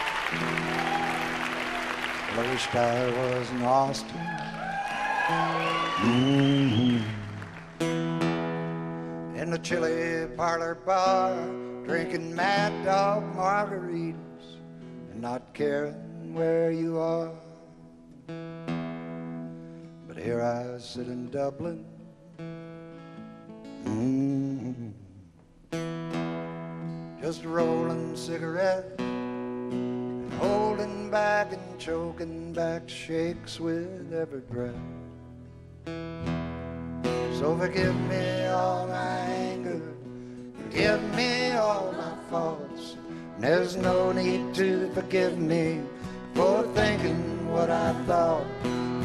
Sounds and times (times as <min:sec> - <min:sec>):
Music: 0:00.0 - 0:49.0.